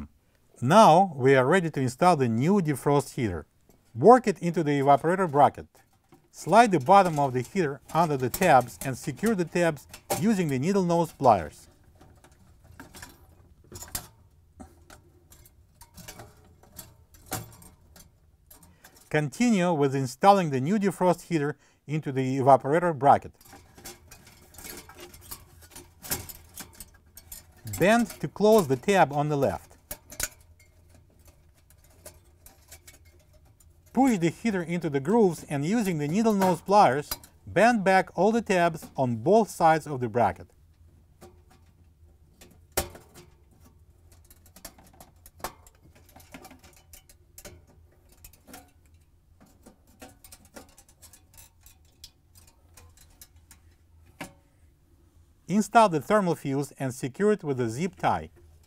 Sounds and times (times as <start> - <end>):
Speech: 0.0 - 3.4, 4.0 - 5.7, 6.4 - 11.7, 19.1 - 23.3, 27.7 - 29.7, 34.0 - 40.5, 55.5 - 58.3.